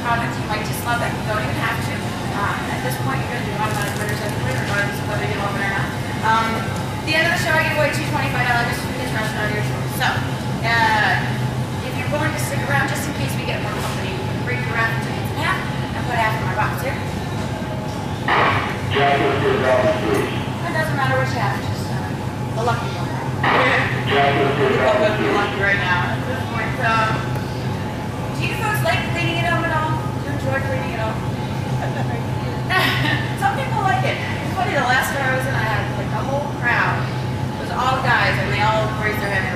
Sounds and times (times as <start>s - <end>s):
Speech: 18.3s - 27.3s.